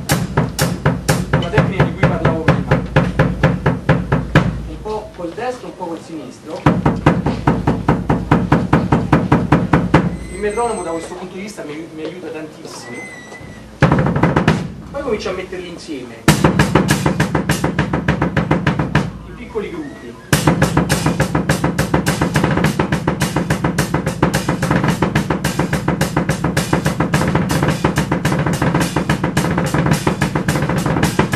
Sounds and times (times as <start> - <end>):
Bass drum: 0.0 - 4.9, 6.6 - 10.6, 13.8 - 15.5, 16.3 - 19.4, 20.4 - 31.3
Drum kit: 0.0 - 5.1, 6.6 - 11.1, 13.6 - 15.6, 16.2 - 19.7, 20.3 - 31.3
Speech: 1.4 - 2.7, 4.7 - 6.8, 10.3 - 13.3, 14.9 - 16.3, 19.3 - 20.4
Hi-hat: 20.4 - 31.3.